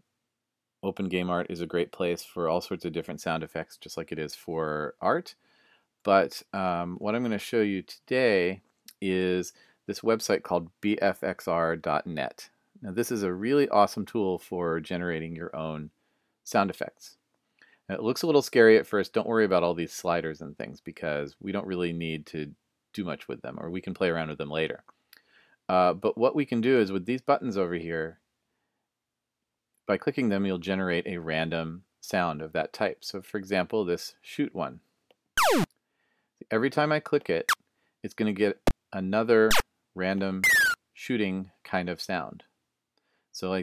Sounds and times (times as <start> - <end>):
Speech: 0.8 - 5.4, 6.1 - 17.2, 17.9 - 24.9, 25.7 - 28.2, 29.9 - 34.8, 36.4 - 37.5, 38.1 - 42.5, 43.4 - 43.6.